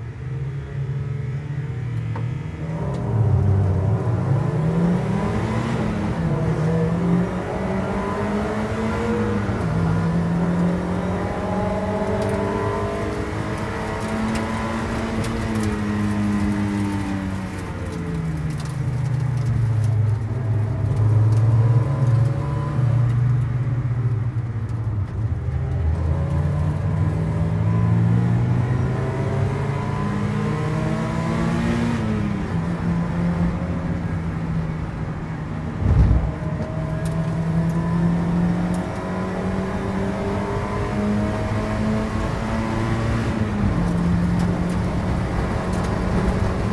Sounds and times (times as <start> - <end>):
Race car, auto racing: 0.0 - 46.7.